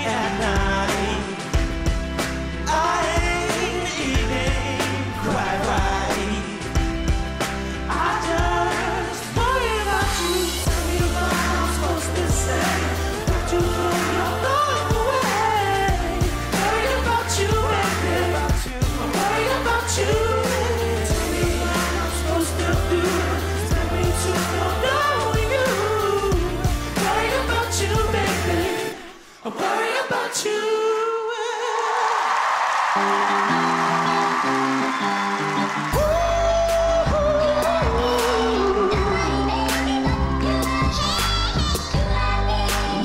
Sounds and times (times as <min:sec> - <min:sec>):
Music: 0:00.0 - 0:31.4, 0:32.4 - 0:43.0
Singing: 0:02.6 - 0:07.0, 0:07.8 - 0:32.4, 0:35.9 - 0:43.0.